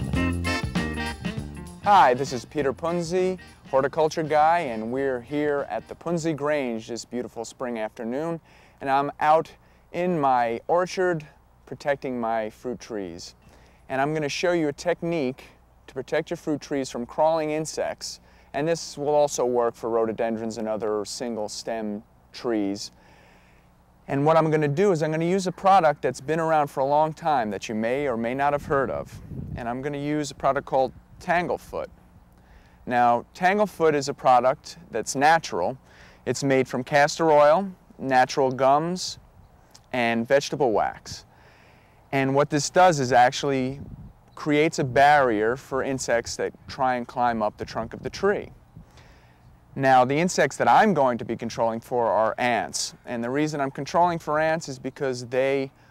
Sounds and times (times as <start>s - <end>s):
Speech: 1.9s - 23.0s, 24.1s - 31.9s, 32.9s - 39.2s, 39.9s - 41.3s, 42.1s - 43.8s, 44.4s - 48.6s, 49.8s - 55.8s.